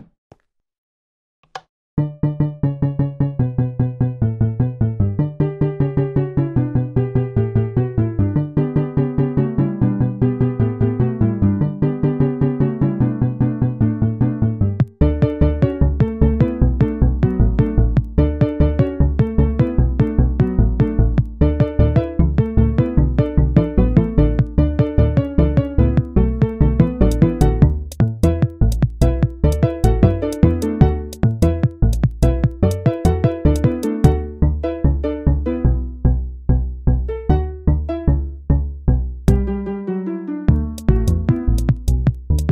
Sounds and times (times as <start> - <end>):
Music: 2.0 - 42.5.